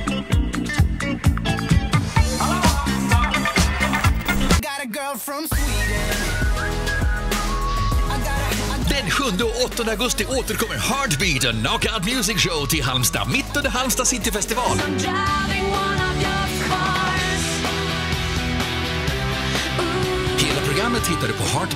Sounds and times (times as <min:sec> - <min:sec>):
Music: 0:00.0 - 0:21.7
Speech: 0:08.8 - 0:14.9, 0:20.4 - 0:21.7.